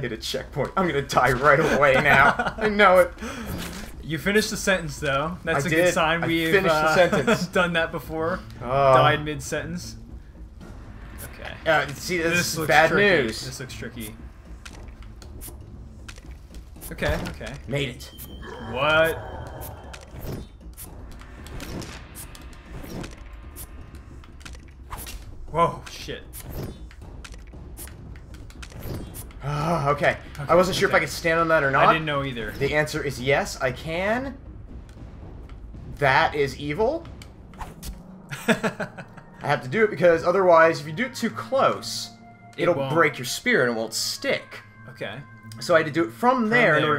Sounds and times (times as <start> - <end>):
Music: 0.0 - 46.9.